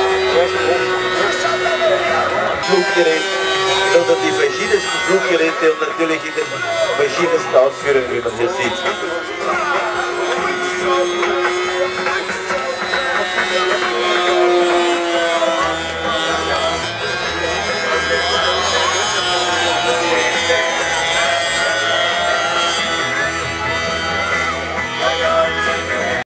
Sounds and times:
Speech: 0.0 - 16.8
Music: 0.0 - 26.2
Vehicle: 0.0 - 26.2.

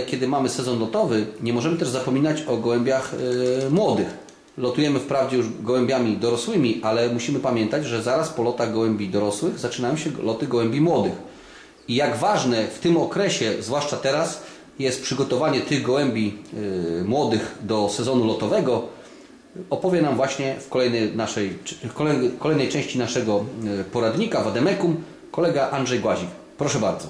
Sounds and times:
Speech: 0.0 - 11.3, 11.9 - 18.9, 19.6 - 27.1
Inside, small room: 0.0 - 27.1.

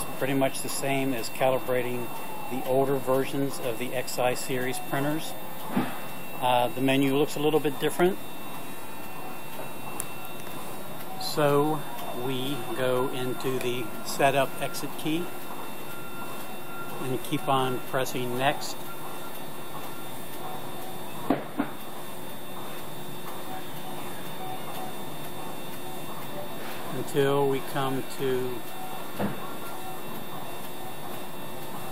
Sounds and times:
Speech: 0.0 - 5.4, 6.4 - 8.3, 11.1 - 15.3, 16.9 - 18.8, 26.5 - 28.8.

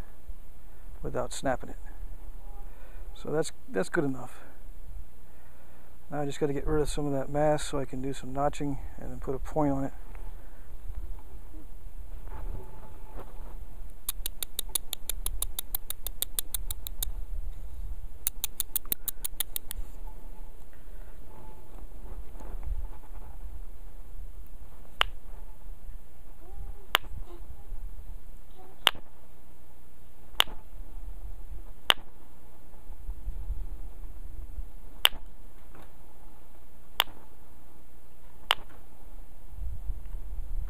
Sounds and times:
Speech: 1.0 - 1.9, 3.2 - 4.5, 6.1 - 10.0.

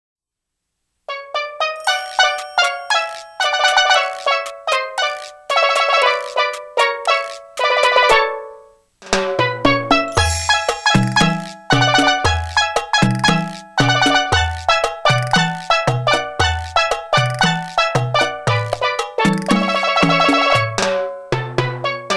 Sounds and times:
Music: 1.1 - 22.1.

